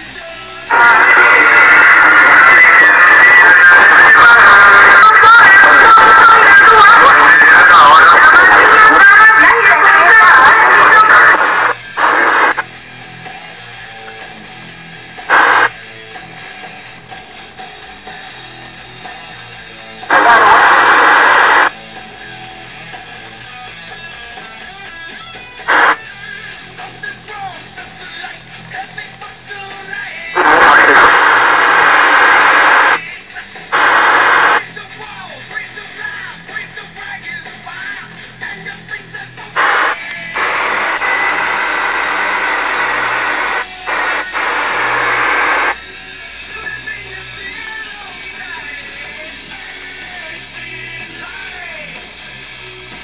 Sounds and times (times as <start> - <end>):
Music: 0.0 - 53.0
Radio: 0.7 - 12.6, 15.3 - 15.8, 20.0 - 21.8, 25.6 - 45.9, 46.5 - 52.0.